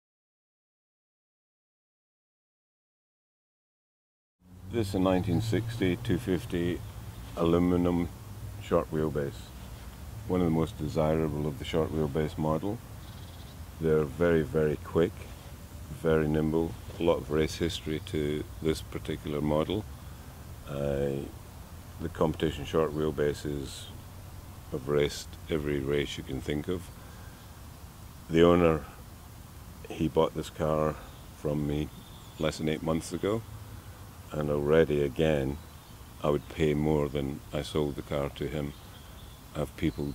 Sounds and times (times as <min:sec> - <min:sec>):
Outside, rural or natural: 0:04.4 - 0:40.1
Speech: 0:04.7 - 0:06.8, 0:07.4 - 0:09.6, 0:10.3 - 0:12.8, 0:13.8 - 0:15.3, 0:15.9 - 0:19.9, 0:20.6 - 0:21.4, 0:22.0 - 0:24.0, 0:24.7 - 0:27.0, 0:28.3 - 0:29.0, 0:29.8 - 0:33.4, 0:34.3 - 0:35.6, 0:36.2 - 0:38.8, 0:39.5 - 0:40.1.